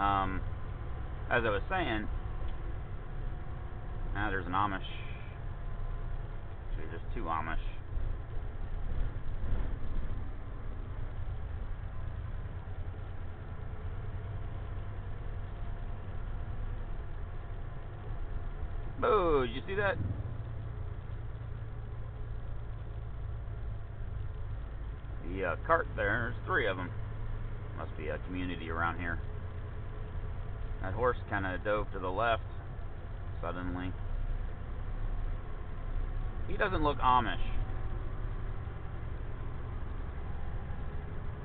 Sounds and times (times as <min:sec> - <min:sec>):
Speech: 0:00.0 - 0:00.4, 0:01.3 - 0:02.1, 0:04.2 - 0:05.2, 0:06.7 - 0:07.8, 0:19.0 - 0:20.0, 0:25.2 - 0:26.9, 0:27.8 - 0:29.2, 0:30.8 - 0:32.4, 0:33.4 - 0:34.0, 0:36.5 - 0:37.6
Truck: 0:00.0 - 0:41.4.